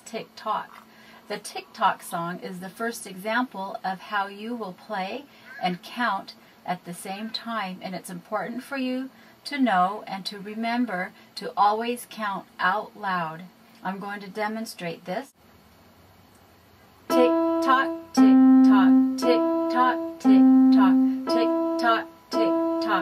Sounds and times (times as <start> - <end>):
Speech: 0.0 - 15.4
Piano: 17.1 - 23.0.